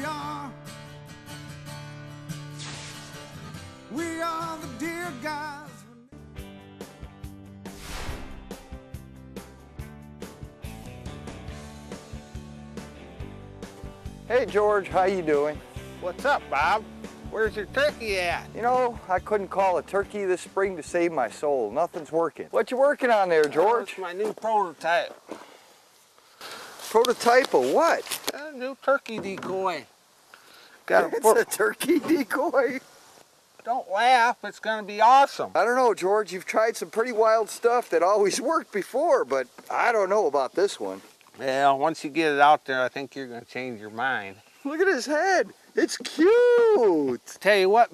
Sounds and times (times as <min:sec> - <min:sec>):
Speech: 0:14.3 - 0:25.2, 0:26.9 - 0:29.9, 0:30.9 - 0:32.8, 0:33.6 - 0:47.9.